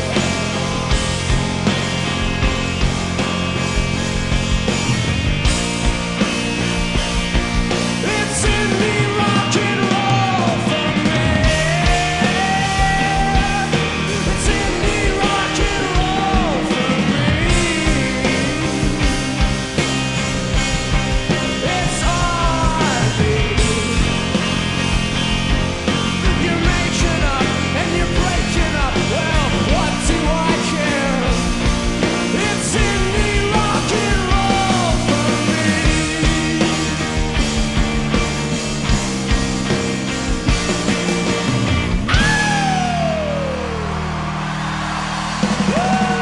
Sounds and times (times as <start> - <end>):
Heavy metal: 0.0 - 46.2
Progressive rock: 0.0 - 46.2.